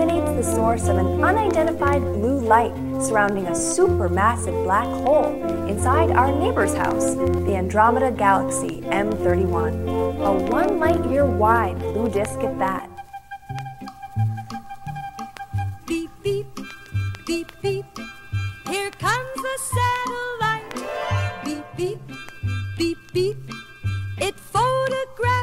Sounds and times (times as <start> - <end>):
Speech: 0.0 - 13.0
Music: 0.0 - 25.4.